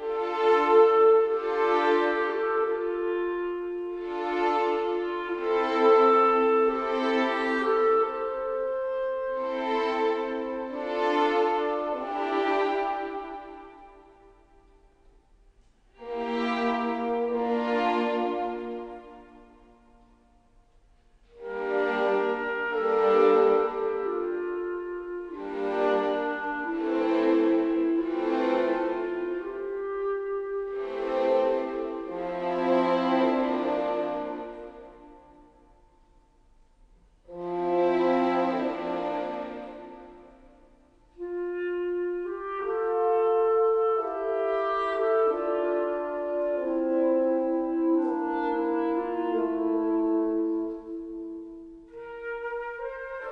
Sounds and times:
Music: 0.0 - 53.3.

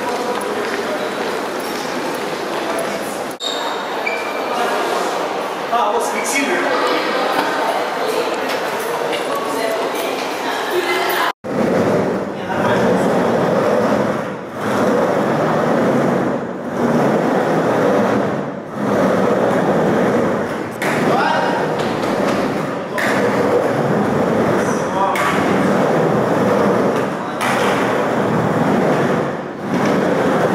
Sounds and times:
Skateboard: 11.5 - 30.5.

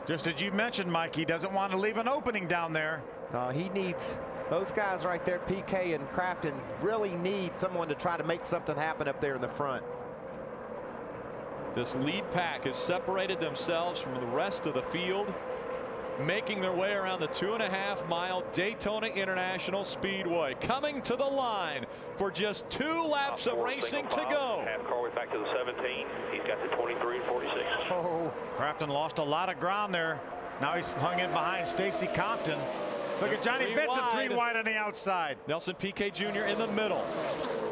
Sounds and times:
Car: 0.0 - 37.7
Speech: 0.1 - 9.8, 11.8 - 15.4, 16.2 - 37.1.

